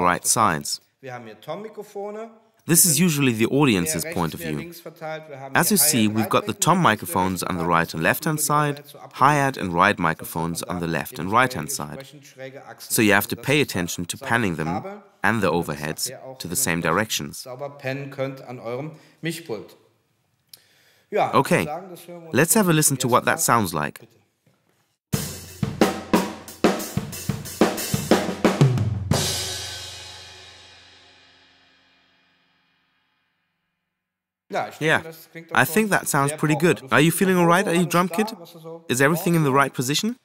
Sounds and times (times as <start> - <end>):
Drum kit: 25.1 - 32.2
Snare drum: 25.2 - 30.0
Bass drum: 25.2 - 30.6.